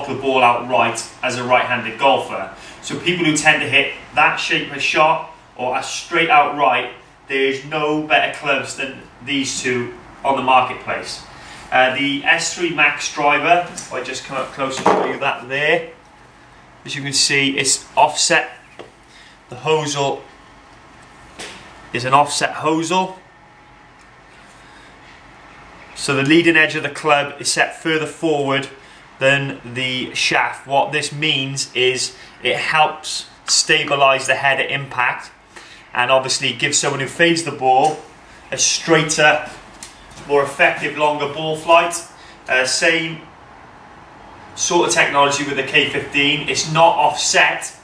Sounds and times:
Speech: 0.0 - 16.0, 16.8 - 18.6, 19.5 - 20.3, 21.9 - 23.2, 26.0 - 39.6, 40.2 - 43.3, 44.6 - 47.8.

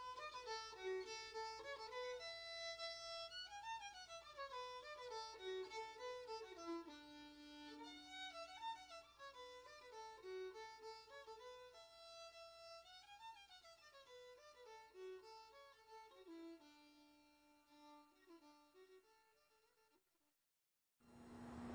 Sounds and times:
Violin, fiddle: 0.0 - 19.8.

